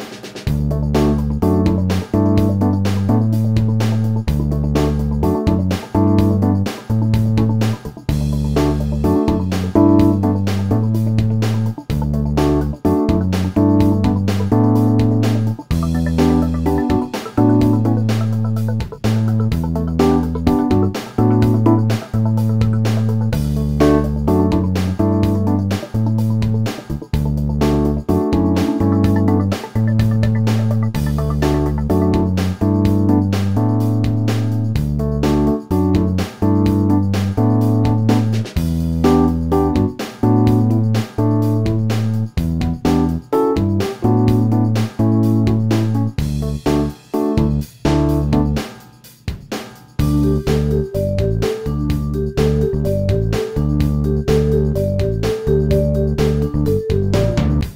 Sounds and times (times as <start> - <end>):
Music: 0.0 - 57.7.